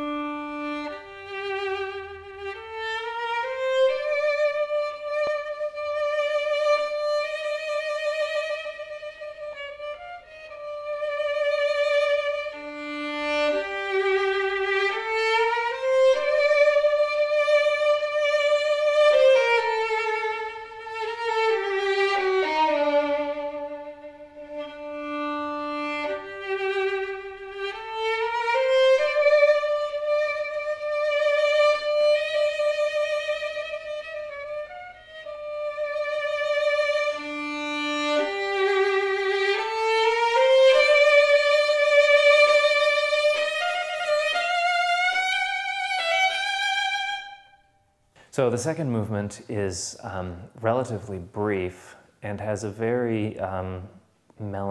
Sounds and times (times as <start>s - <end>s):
Violin, fiddle: 0.0s - 47.6s.